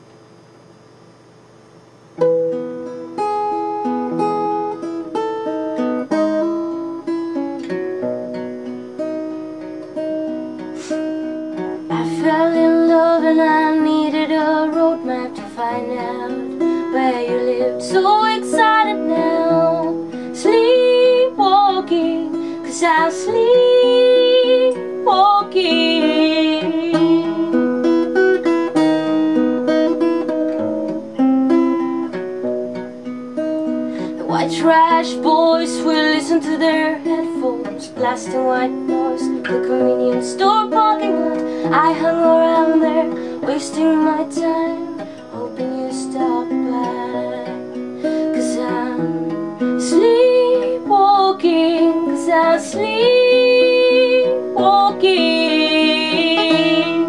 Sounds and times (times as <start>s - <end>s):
Music: 2.2s - 57.0s.